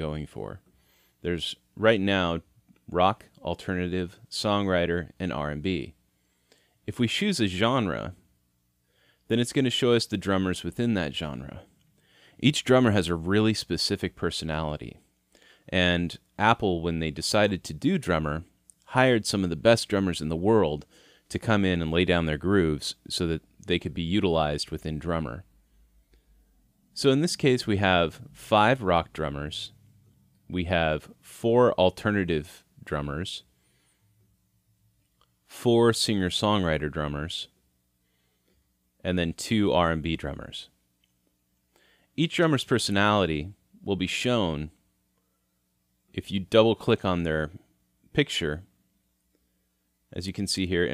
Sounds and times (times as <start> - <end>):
Speech: 0.0 - 0.6, 1.2 - 6.0, 6.8 - 8.3, 9.3 - 11.7, 12.4 - 15.1, 15.7 - 25.5, 26.9 - 29.8, 30.4 - 33.5, 35.4 - 37.6, 39.0 - 40.8, 42.2 - 44.8, 46.1 - 48.7, 50.1 - 50.9.